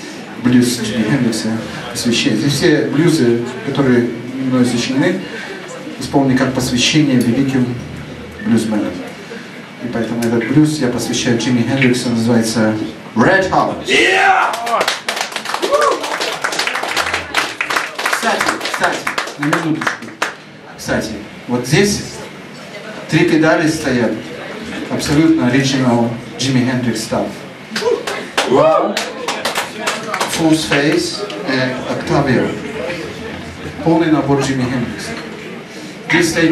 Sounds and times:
Speech: 0.0 - 14.8, 17.8 - 35.4, 36.1 - 36.5.

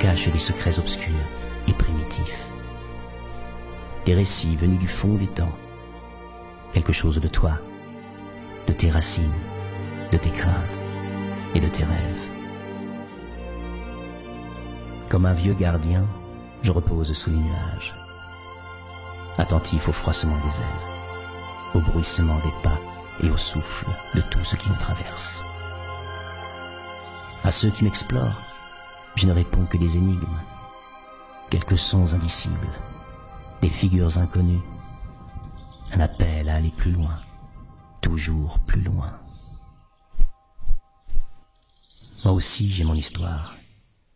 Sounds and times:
Speech: 0.0 - 2.5, 4.0 - 5.6, 6.7 - 7.7, 8.7 - 9.5, 10.1 - 10.8, 11.5 - 12.3, 15.1 - 18.0, 19.4 - 20.8, 21.8 - 25.5, 27.4 - 28.5, 29.2 - 30.6, 31.5 - 32.8, 33.6 - 34.7, 35.9 - 37.3, 38.0 - 39.3, 42.2 - 43.7
Music: 0.0 - 43.9.

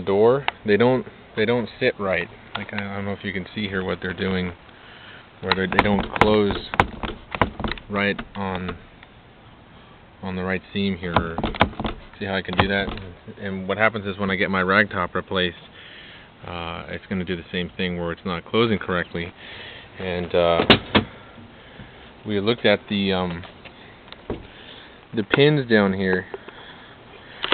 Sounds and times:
Speech: 0.0 - 4.6, 5.4 - 6.7, 7.9 - 8.8, 10.2 - 11.4, 12.2 - 15.6, 16.4 - 19.3, 20.0 - 20.7, 22.2 - 23.5, 25.1 - 26.4.

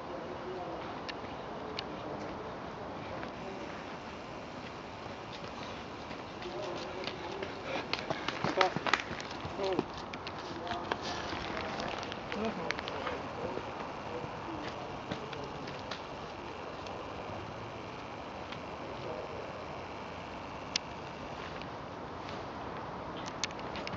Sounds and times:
Speech: 0.0 - 3.8, 6.4 - 8.8, 9.5 - 9.9, 10.5 - 17.6, 18.8 - 19.8
Outside, rural or natural: 0.0 - 23.9.

